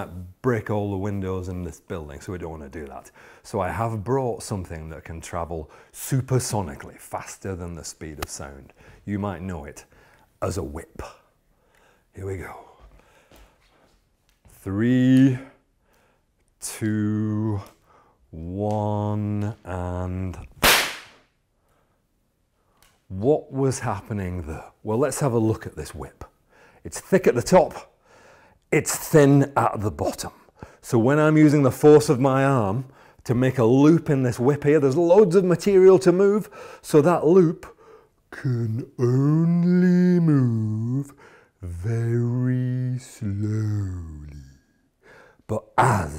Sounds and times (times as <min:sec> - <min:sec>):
Whip: 0:20.6 - 0:21.3.